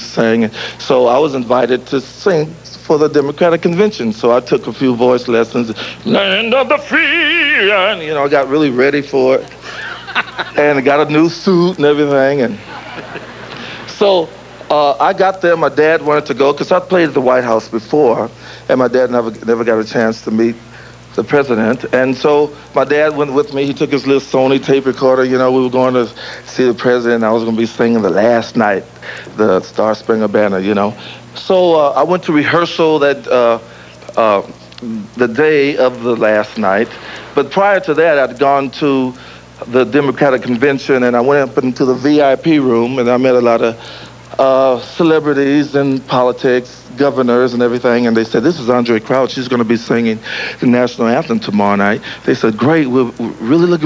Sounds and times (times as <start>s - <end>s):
Speech: 0.0s - 9.8s, 10.4s - 12.7s, 13.8s - 53.8s
Male singing: 6.1s - 8.2s.